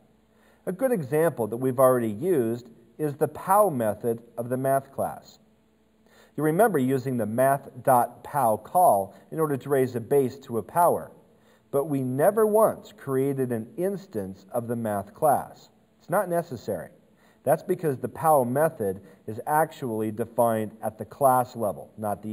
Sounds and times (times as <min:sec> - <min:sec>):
Speech: 0:00.7 - 0:05.4, 0:06.4 - 0:22.3.